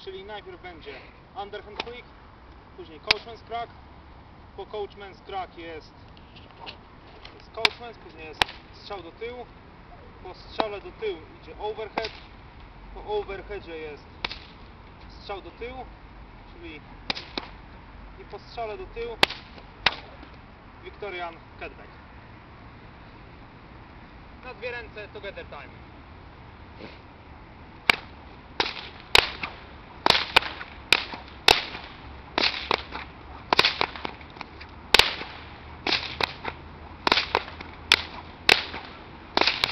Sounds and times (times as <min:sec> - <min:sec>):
Whip: 0:03.1 - 0:03.3, 0:07.6 - 0:08.7, 0:12.0 - 0:12.3, 0:14.2 - 0:14.6, 0:17.1 - 0:17.6, 0:19.2 - 0:20.2, 0:27.9 - 0:39.7.